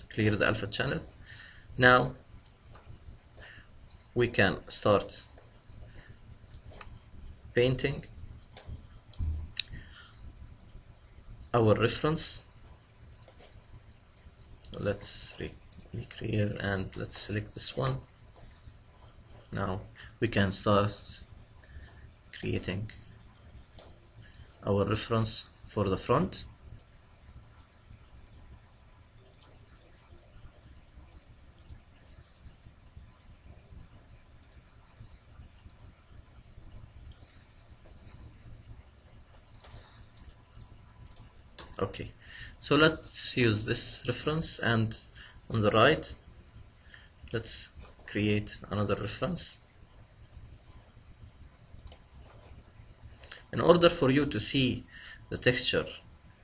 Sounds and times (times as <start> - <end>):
Clicking: 2.4 - 2.9, 6.5 - 7.0, 8.5 - 9.8, 10.6 - 10.8, 13.1 - 13.5, 15.7 - 15.9, 23.4 - 24.4, 26.6 - 26.9, 27.7 - 28.5, 29.3 - 29.6, 31.6 - 31.8, 34.4 - 34.6, 37.1 - 37.4, 39.3 - 41.8, 50.2 - 50.5, 51.7 - 52.4.